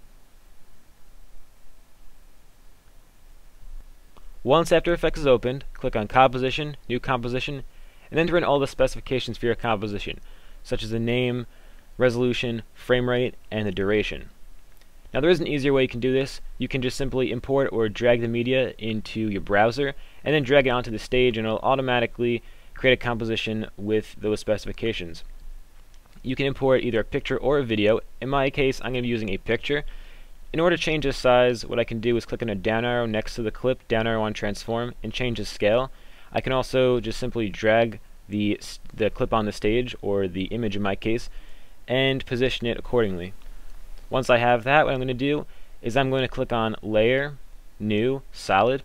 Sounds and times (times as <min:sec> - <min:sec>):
Narration, monologue: 0:00.0 - 0:48.8
Male speech, man speaking: 0:04.5 - 0:14.3, 0:15.2 - 0:25.2, 0:26.2 - 0:29.8, 0:30.6 - 0:41.3, 0:41.9 - 0:43.4, 0:44.1 - 0:48.8.